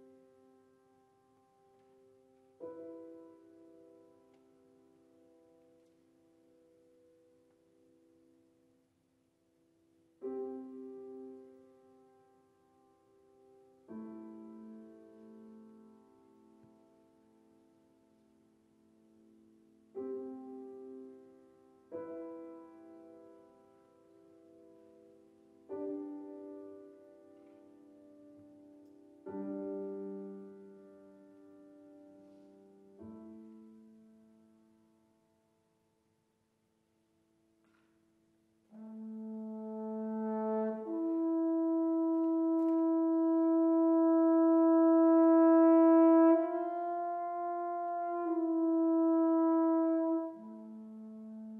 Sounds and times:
Piano: 0:00.0 - 0:51.5.

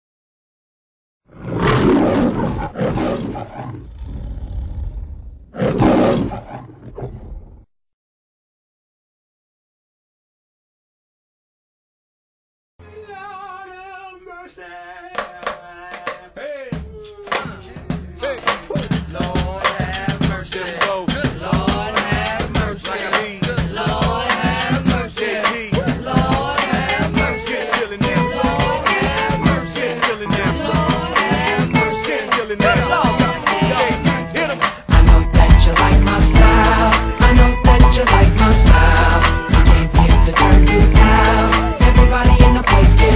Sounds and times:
Wild animals: 0:01.3 - 0:07.7.

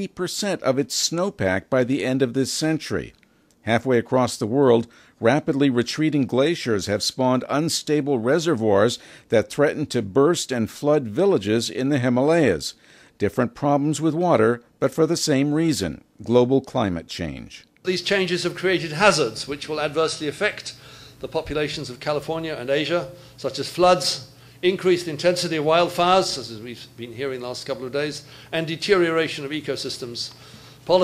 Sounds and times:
Speech: 0:00.0 - 0:31.0.

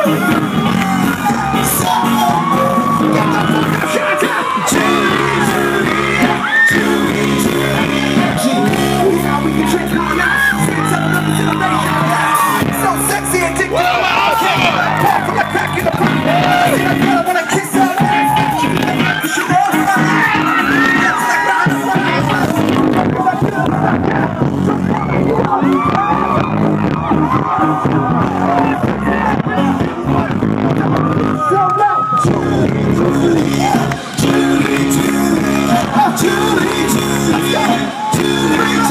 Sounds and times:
Crowd: 0:00.0 - 0:38.9
Music: 0:00.0 - 0:38.9.

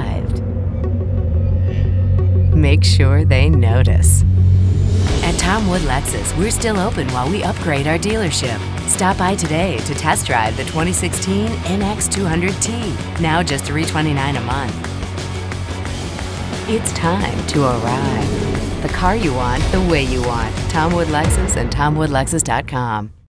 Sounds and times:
Speech: 0:00.0 - 0:00.4, 0:02.6 - 0:04.2, 0:05.2 - 0:14.8, 0:16.7 - 0:23.1
Music: 0:00.0 - 0:23.3.

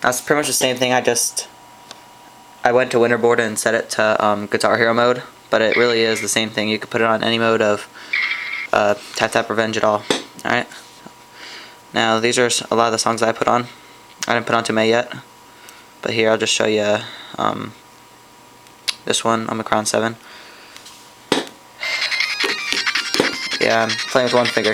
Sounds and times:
Speech: 0:00.0 - 0:01.6, 0:02.6 - 0:07.9, 0:08.7 - 0:10.8, 0:12.0 - 0:15.3, 0:16.0 - 0:17.8, 0:18.9 - 0:20.2, 0:23.6 - 0:24.7.

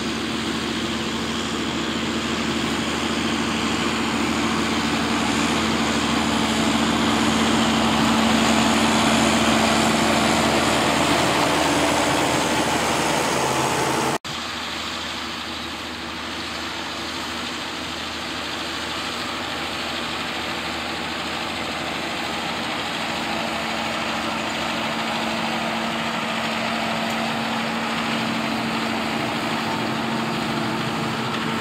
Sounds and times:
Vehicle: 0:00.0 - 0:31.6.

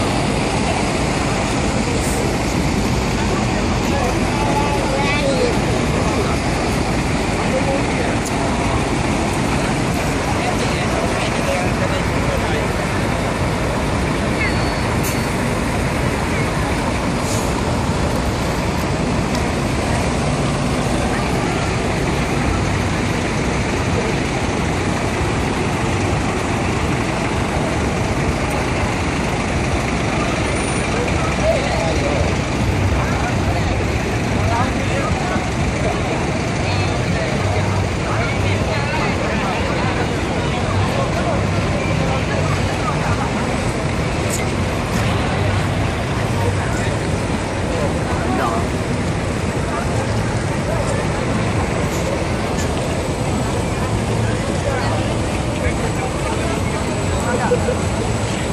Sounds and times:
Speech: 0:00.0 - 0:17.6, 0:19.4 - 0:58.5.

